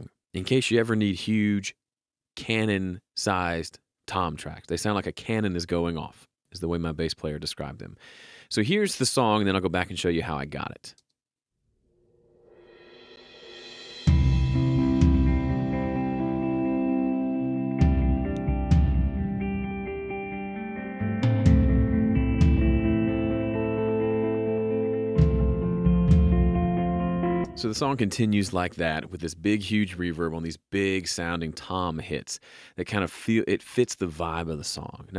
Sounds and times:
Speech: 0.0 - 1.8, 2.4 - 11.0, 27.6 - 35.1
Music: 12.7 - 27.9.

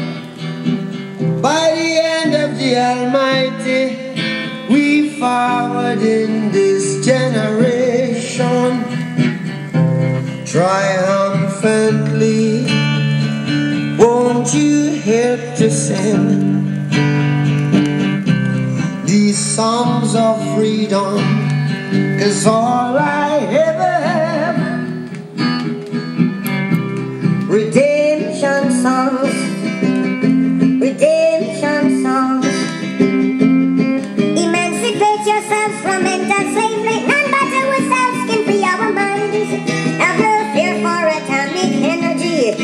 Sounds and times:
Music: 0.0 - 42.6
Synthetic singing: 34.4 - 42.6.

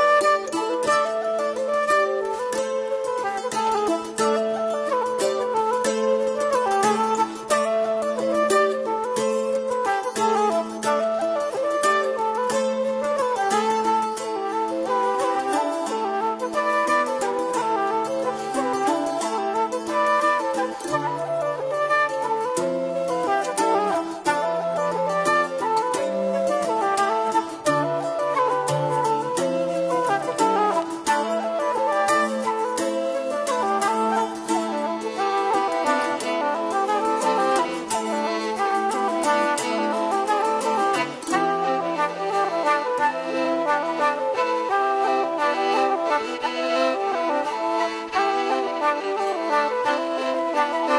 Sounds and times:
Music: 0.0 - 50.9.

